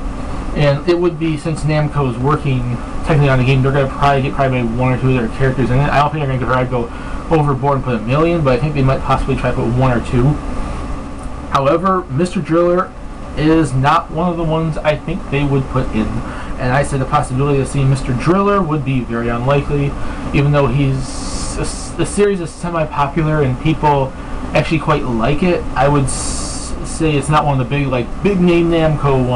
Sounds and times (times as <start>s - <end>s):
Speech: 0.6s - 10.4s, 11.5s - 29.3s.